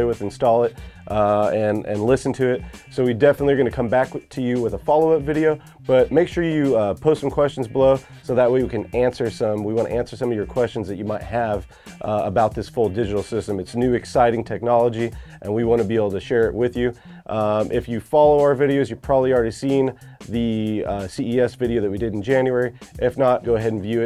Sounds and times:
Music: 0.0 - 24.0
Speech: 0.0 - 24.0.

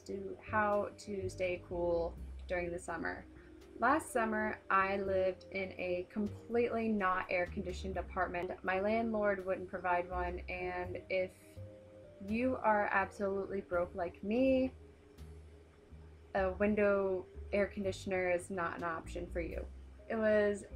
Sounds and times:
Speech: 0.0 - 3.2, 3.8 - 11.3, 12.2 - 14.7, 16.4 - 20.7
Music: 0.0 - 20.7.

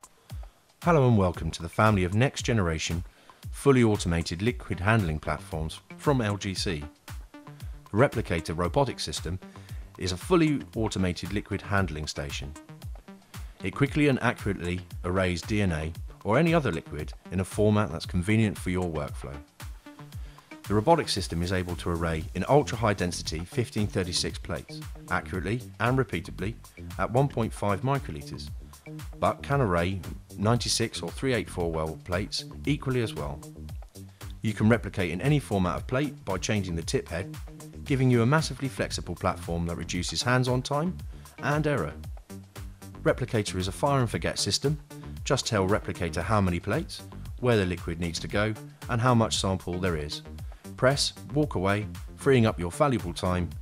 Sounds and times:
Music: 0.0 - 53.6
Speech: 0.8 - 6.9, 7.9 - 9.4, 10.0 - 12.6, 13.6 - 19.4, 20.7 - 28.6, 29.2 - 33.5, 34.4 - 37.3, 37.9 - 42.0, 43.0 - 50.2, 50.8 - 53.6.

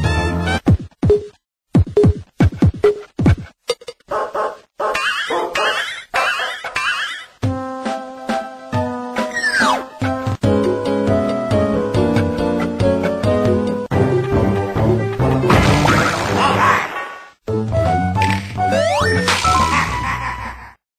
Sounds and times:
Funny music: 5.0 - 16.9, 17.5 - 20.8.

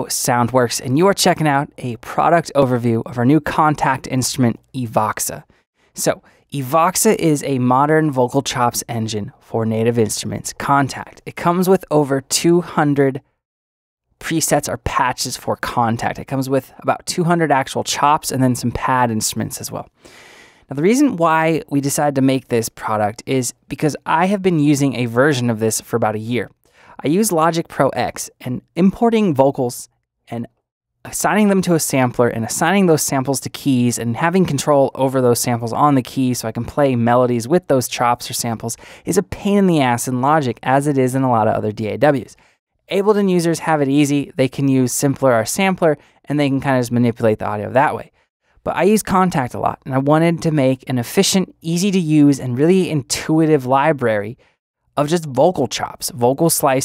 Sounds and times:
Speech: 0.0 - 13.3, 14.2 - 19.9, 20.7 - 54.4, 55.0 - 56.8.

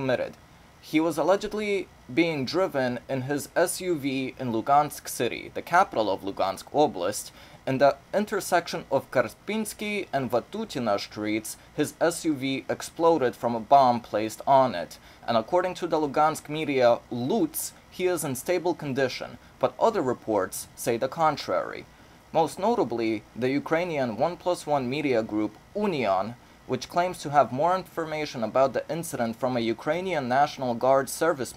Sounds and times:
Speech: 0.0 - 31.5.

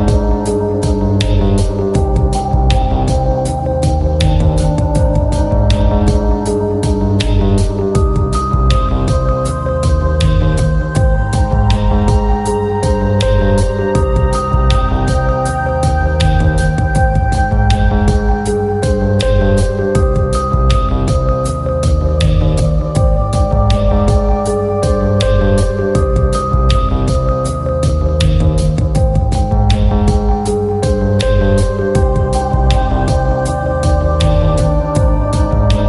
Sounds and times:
Music: 0.0 - 35.8.

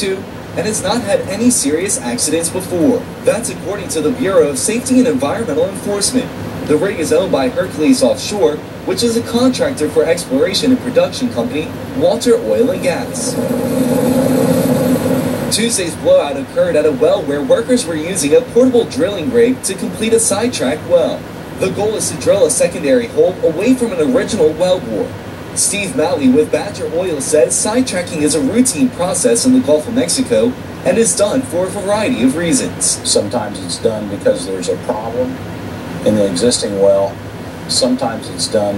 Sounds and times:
Speech: 0.0 - 13.4, 15.5 - 35.4, 36.0 - 38.7.

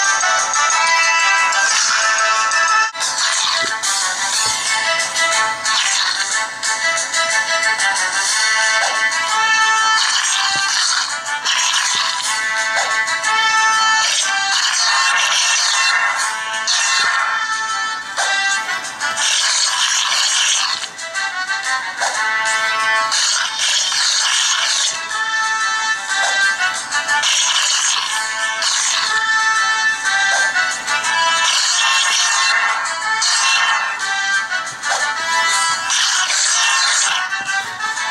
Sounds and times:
Music: 0.0 - 38.1.

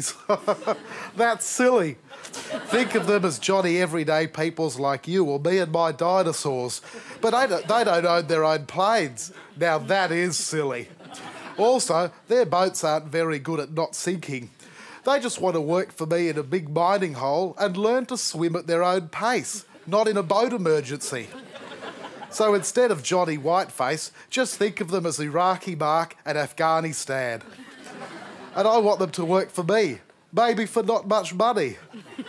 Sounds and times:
Speech: 1.2 - 2.0, 2.7 - 10.9, 11.6 - 21.4, 22.4 - 27.4, 28.6 - 31.9.

